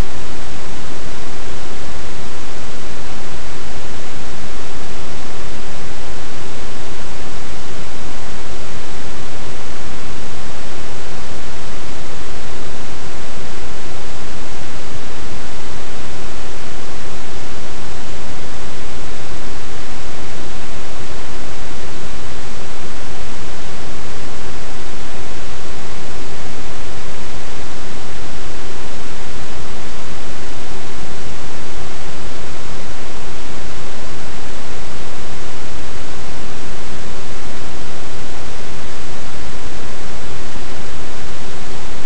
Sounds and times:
Pink noise: 0.0 - 42.0.

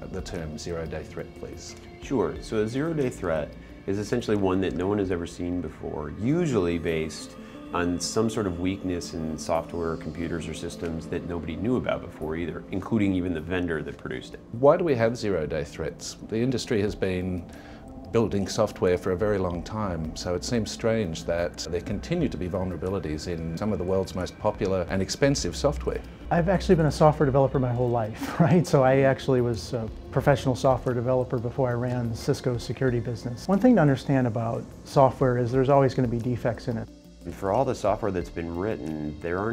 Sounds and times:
Music: 0.0 - 39.5
Speech: 0.0 - 39.5.

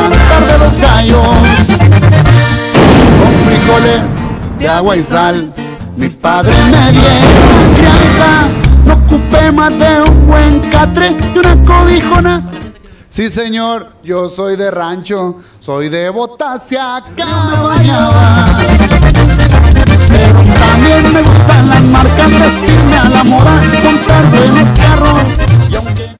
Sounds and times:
Music: 0.0 - 13.0, 16.9 - 26.1.

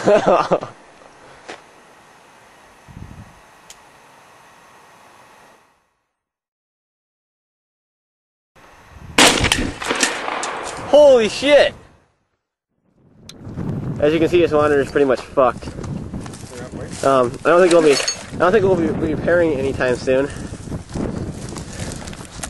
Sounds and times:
Speech: 10.9 - 11.8, 14.0 - 15.7, 16.4 - 20.4.

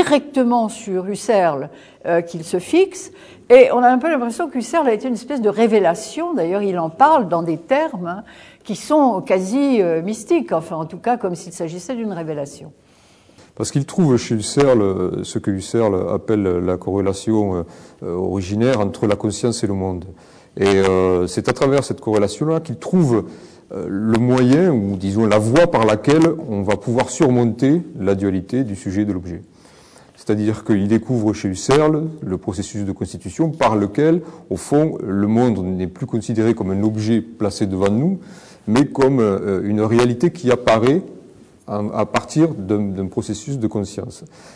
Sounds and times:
Speech: 0.0 - 12.7, 13.6 - 29.4, 30.2 - 41.1, 41.7 - 44.3.

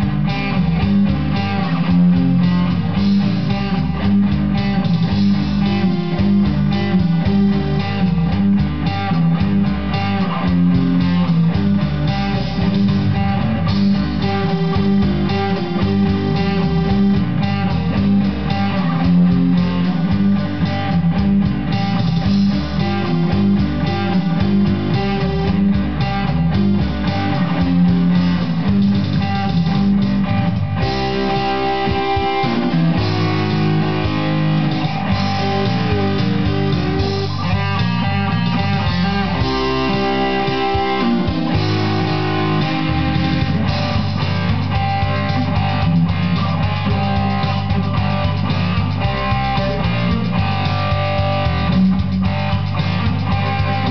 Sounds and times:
Strum: 0.0 - 53.9.

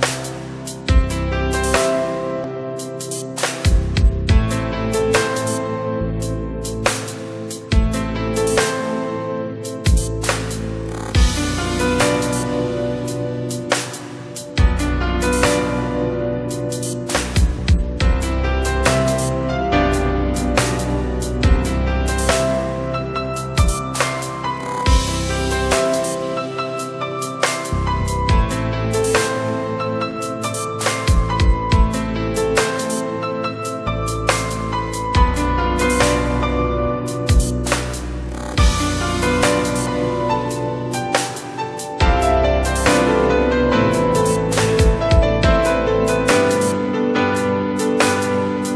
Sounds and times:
Electronic music: 0.0 - 48.7.

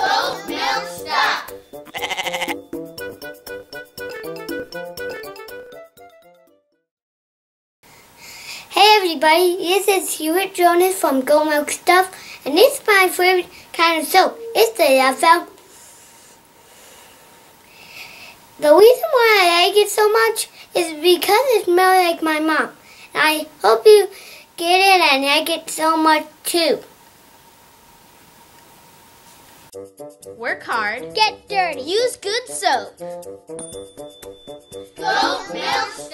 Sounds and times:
Music: 0.0 - 6.9, 13.8 - 15.6, 29.7 - 36.1
Speech: 8.8 - 15.5, 18.6 - 26.9, 30.4 - 33.0.

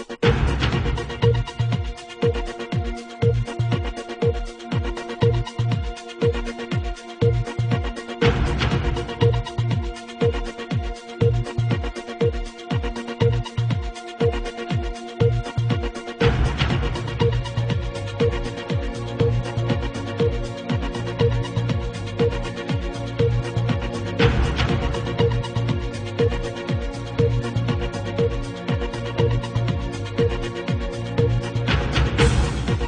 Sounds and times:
Music: 0.0 - 32.8.

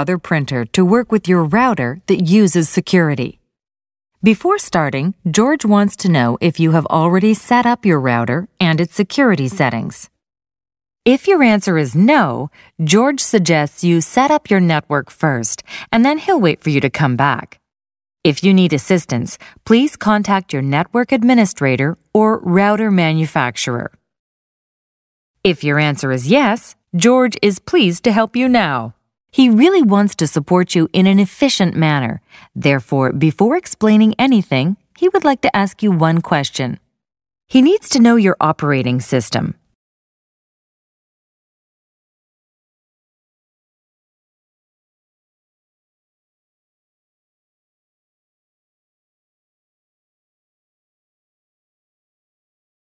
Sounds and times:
Speech: 0.0 - 3.4, 4.2 - 10.2, 11.1 - 17.6, 18.3 - 24.0, 25.5 - 36.8, 37.5 - 39.6.

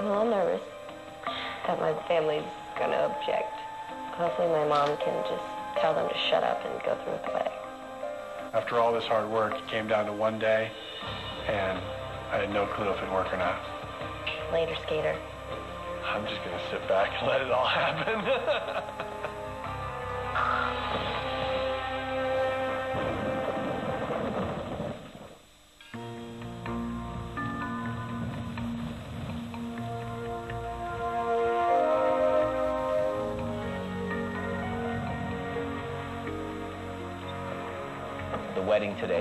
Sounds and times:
Music: 0.0 - 39.2.

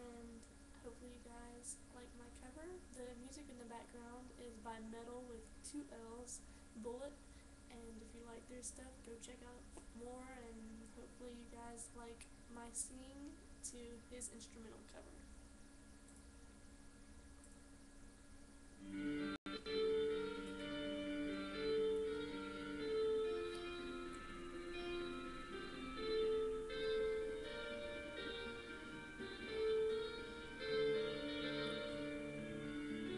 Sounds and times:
Tender music: 18.8 - 33.1.

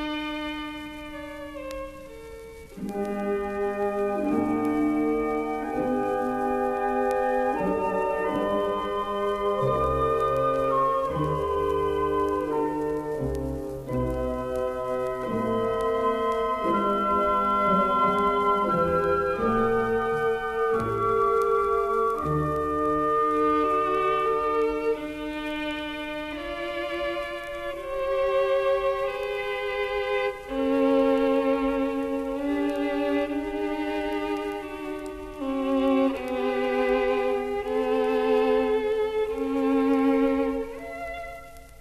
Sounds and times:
Violin, fiddle: 0.0 - 41.8.

